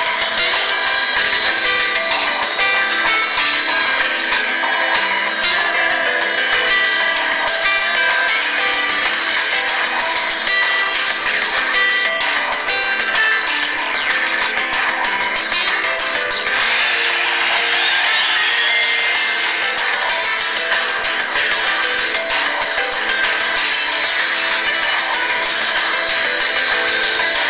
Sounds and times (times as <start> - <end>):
Music: 0.0 - 27.4.